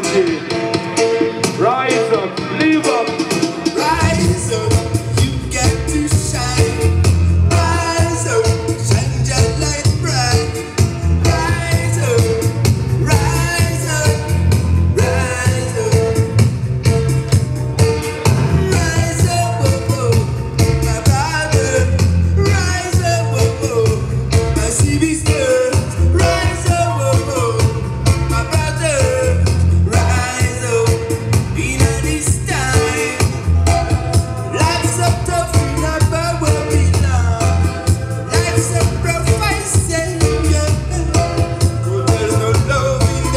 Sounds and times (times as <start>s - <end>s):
Music: 0.0s - 43.3s.